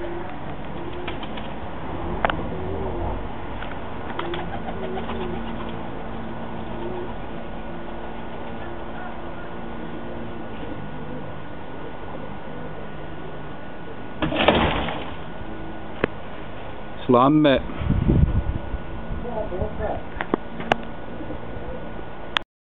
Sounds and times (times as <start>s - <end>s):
Speech: 17.0s - 17.6s, 19.2s - 20.1s.